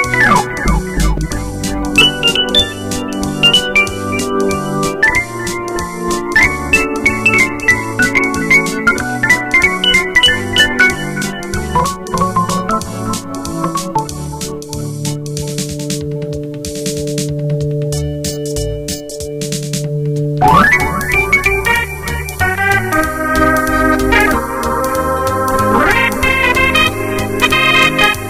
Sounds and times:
Electric piano: 0.0s - 28.3s.

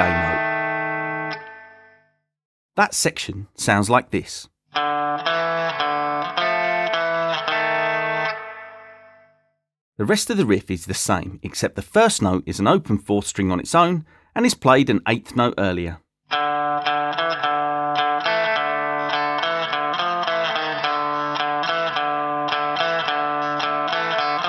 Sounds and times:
Speech: 0.0s - 0.4s, 2.8s - 4.5s, 10.0s - 16.0s
Guitar: 0.0s - 2.2s, 4.7s - 9.6s, 16.3s - 24.4s.

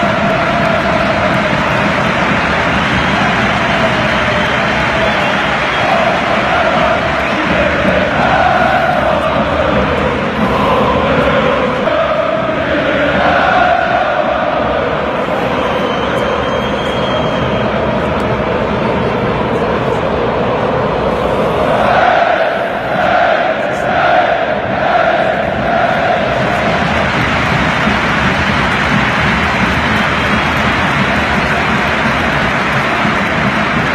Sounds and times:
Music: 0.0s - 33.9s
Male singing: 5.9s - 13.6s.

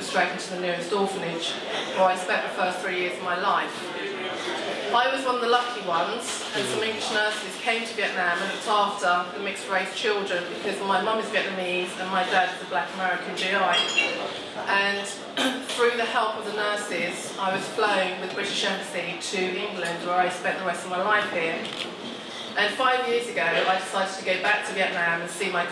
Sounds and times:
Female speech, woman speaking: 0.0s - 4.0s, 4.9s - 21.7s, 22.6s - 25.7s
Narration, monologue: 0.0s - 25.7s.

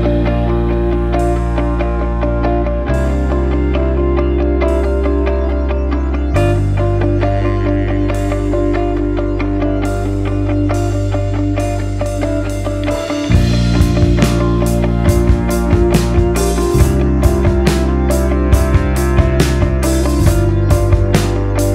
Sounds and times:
Music: 0.0s - 21.7s.

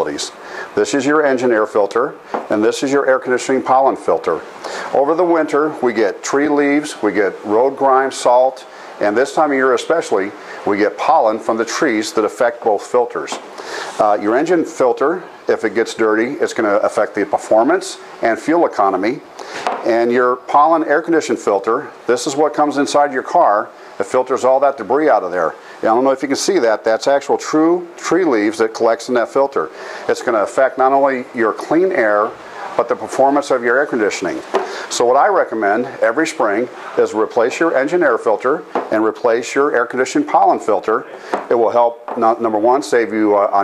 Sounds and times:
Speech: 0.0s - 13.4s, 14.0s - 43.6s.

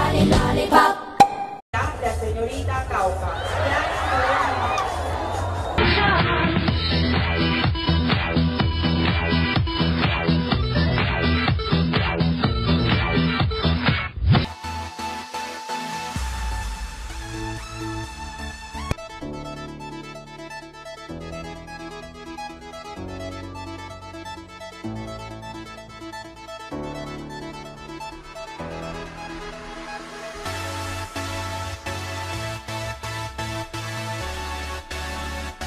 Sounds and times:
Music: 0.0s - 1.1s, 1.7s - 35.6s.

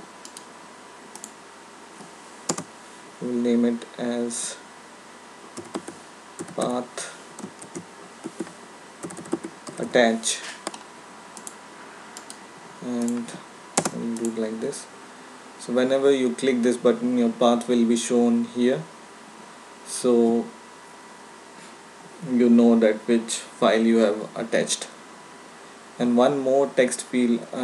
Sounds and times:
Speech: 3.2s - 4.7s, 6.6s - 7.2s, 9.8s - 10.6s, 12.8s - 15.0s, 15.6s - 18.9s, 19.9s - 20.6s, 22.2s - 25.0s, 26.0s - 27.6s
Computer keyboard: 5.6s - 6.7s, 7.4s - 9.9s, 13.8s - 14.4s.

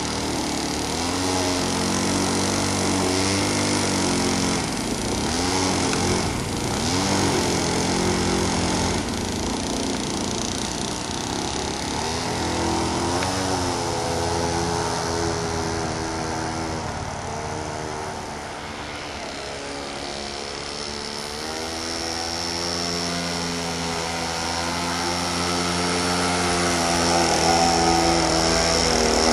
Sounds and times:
Motorboat, speedboat: 0.0s - 29.3s.

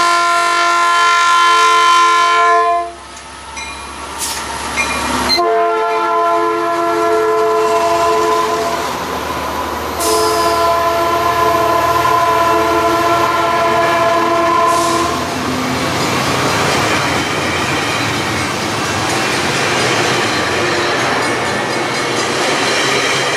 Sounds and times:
Train whistle: 0.0s - 3.0s, 5.3s - 9.0s, 10.0s - 15.3s
Railroad car, train wagon: 0.0s - 23.3s.

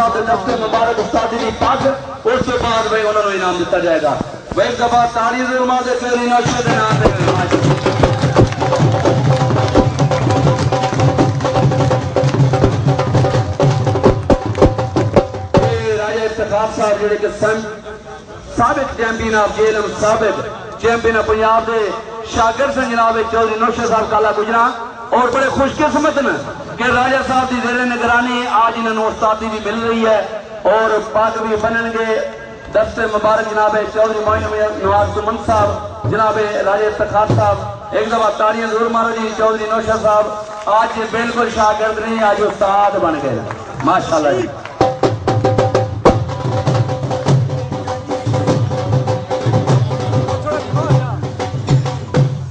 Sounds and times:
Speech: 0.0s - 7.6s, 15.6s - 44.7s, 49.8s - 51.2s
Music: 6.4s - 15.9s, 44.8s - 52.5s.

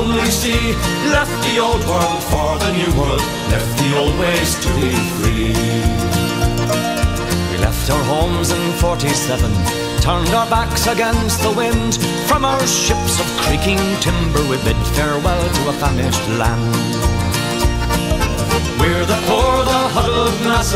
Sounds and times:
Music: 0.0s - 20.7s.

